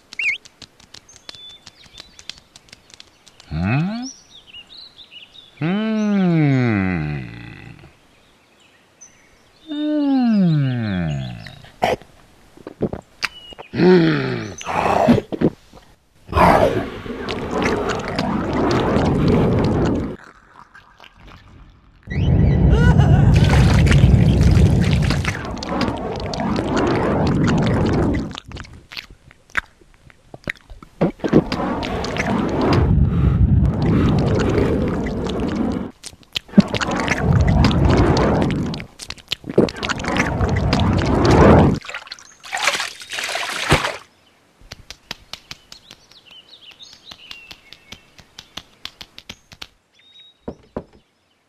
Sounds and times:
Outside, rural or natural: 0.0 - 51.4.

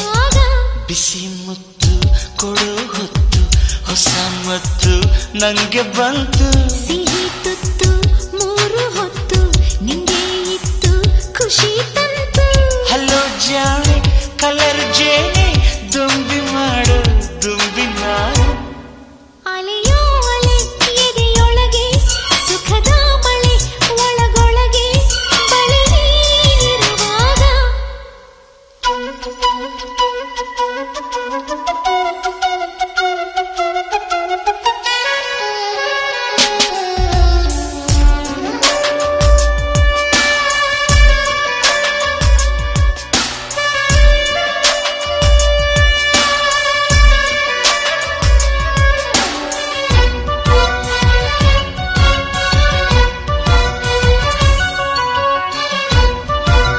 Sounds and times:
Flute: 28.8 - 56.7.

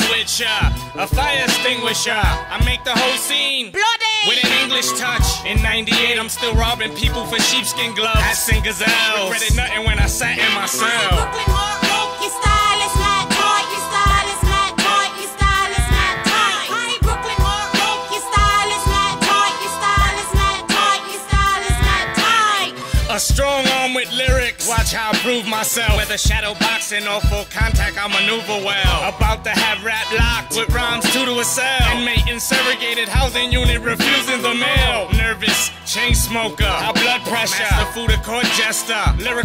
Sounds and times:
Music: 0.0 - 39.4
Rapping: 0.0 - 39.4.

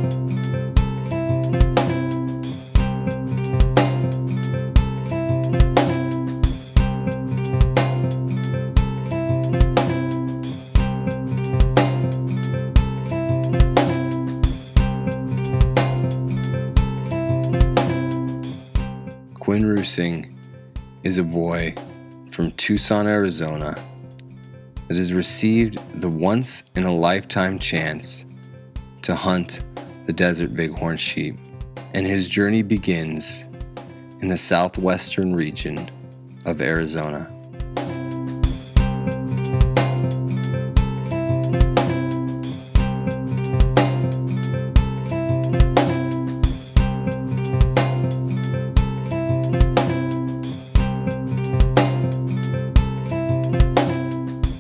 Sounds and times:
Music: 0.0 - 54.6.

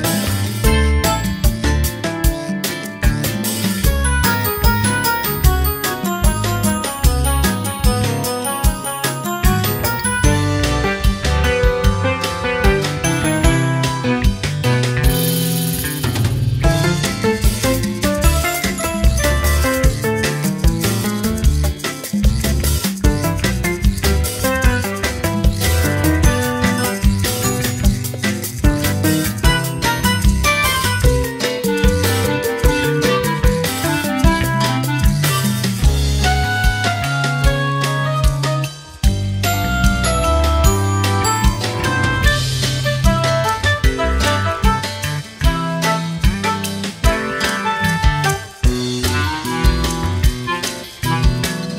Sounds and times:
Jingle, tinkle: 0.2 - 2.0, 3.5 - 11.9, 12.8 - 15.6, 17.2 - 23.3, 25.5 - 32.5, 38.8 - 43.6.

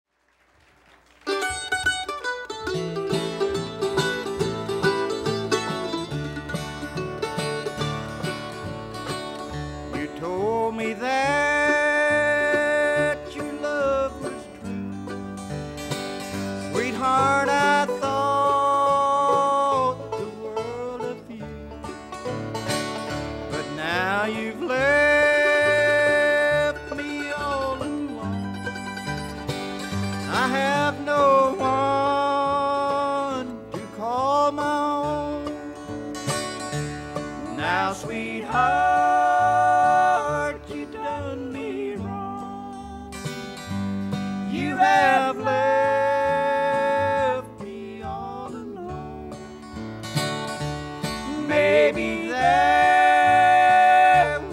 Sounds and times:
Bluegrass: 0.3 - 54.5
Banjo: 1.2 - 54.5
Guitar: 1.2 - 54.5
Mandolin: 1.2 - 54.5.

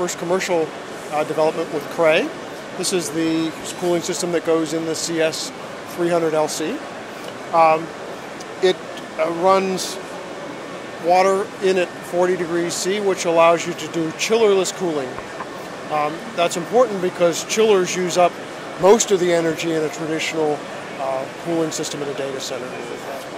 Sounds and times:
Speech: 0.0 - 6.8, 7.6 - 7.9, 8.6 - 10.0, 11.0 - 15.2, 15.9 - 23.3.

